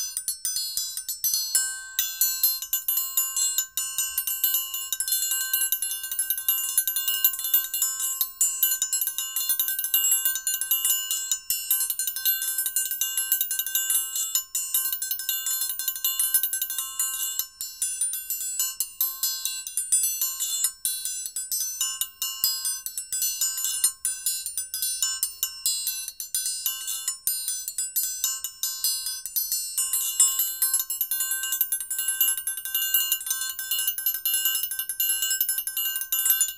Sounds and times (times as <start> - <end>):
Inside, small room: 0.0 - 36.5
Music: 0.0 - 36.5.